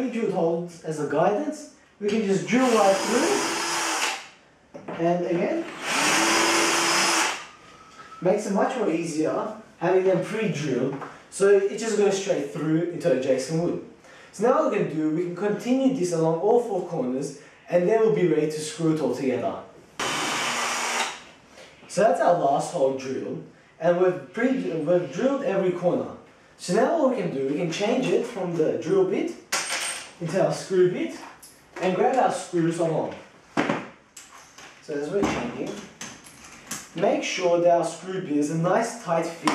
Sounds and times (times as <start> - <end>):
Drill: 2.6 - 4.3, 5.6 - 7.5, 20.0 - 21.2.